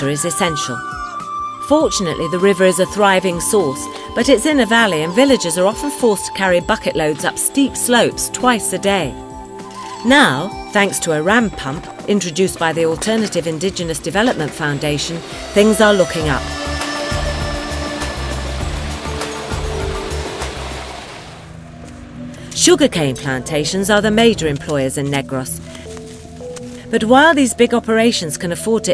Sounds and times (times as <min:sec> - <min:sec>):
Speech: 0:00.0 - 0:00.8, 0:01.6 - 0:09.2, 0:10.0 - 0:16.4, 0:22.6 - 0:25.6, 0:26.9 - 0:28.9
Music: 0:00.0 - 0:28.9.